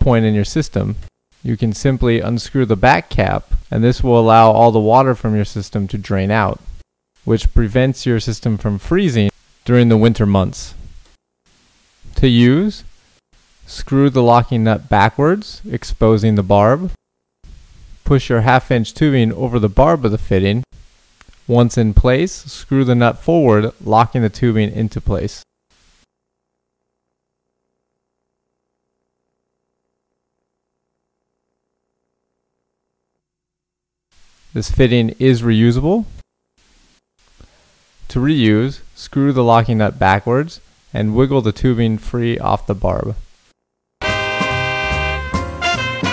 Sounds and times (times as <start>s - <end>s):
Speech: 0.0s - 10.8s, 12.1s - 12.9s, 13.7s - 17.0s, 18.0s - 20.7s, 21.5s - 25.5s, 34.5s - 36.2s, 38.1s - 43.3s.